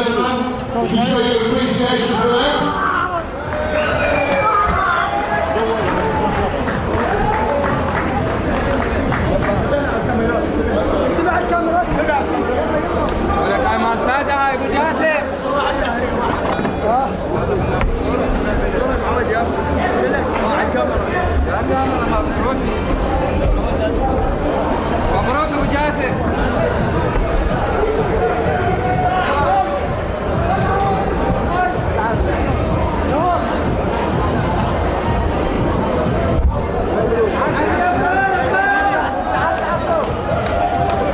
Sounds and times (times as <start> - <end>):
Chatter: 0.0 - 41.1
Inside, large room or hall: 0.0 - 41.1
Music: 0.0 - 41.1.